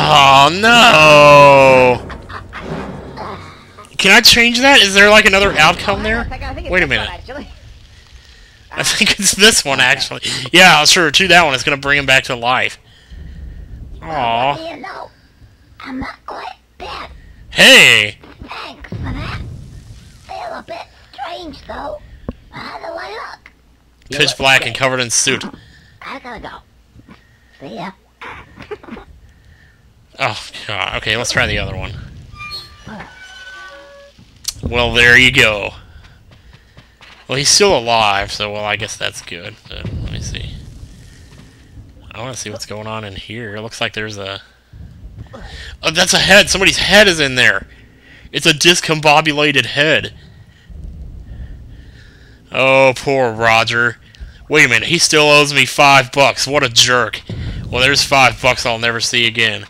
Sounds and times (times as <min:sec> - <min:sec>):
Speech: 0:00.0 - 0:02.0, 0:04.0 - 0:07.5, 0:08.7 - 0:12.8, 0:24.1 - 0:26.6, 0:30.2 - 0:32.1, 0:34.5 - 0:35.8, 0:37.3 - 0:40.6, 0:42.1 - 0:44.4, 0:45.4 - 0:47.7, 0:48.4 - 0:50.1, 0:52.5 - 0:59.6.